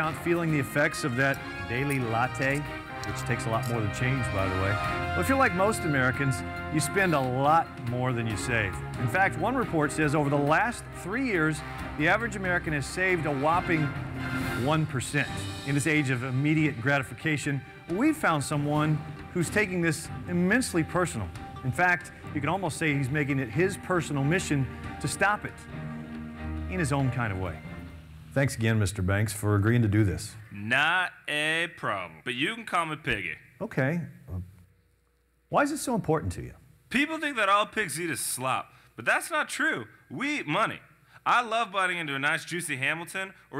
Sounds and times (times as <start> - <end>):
Speech: 0.0 - 13.9, 14.6 - 25.5, 26.7 - 27.6, 28.4 - 34.5, 35.5 - 43.6.